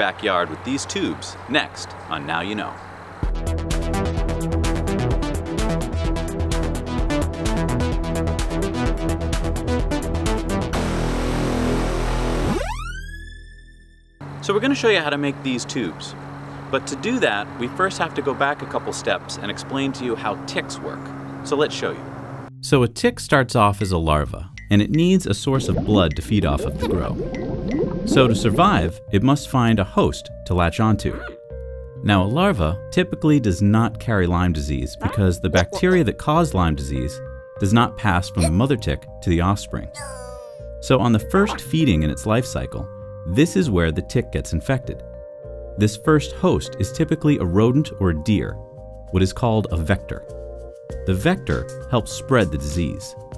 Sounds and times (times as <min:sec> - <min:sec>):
Speech: 0:00.0 - 0:02.8, 0:14.4 - 0:22.0, 0:22.6 - 0:27.2, 0:28.2 - 0:31.4, 0:32.0 - 0:45.0, 0:45.8 - 0:48.6, 0:49.2 - 0:50.2, 0:51.1 - 0:53.2.